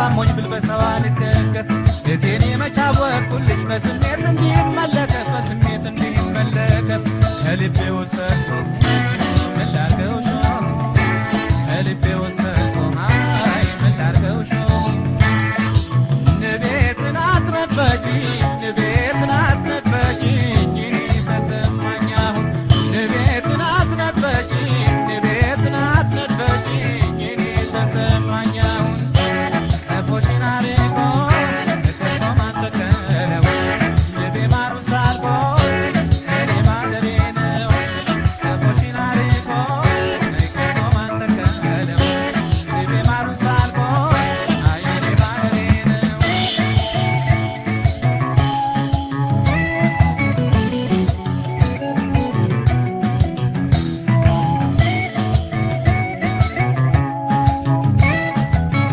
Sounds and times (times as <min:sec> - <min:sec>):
Music: 0:00.0 - 0:58.9.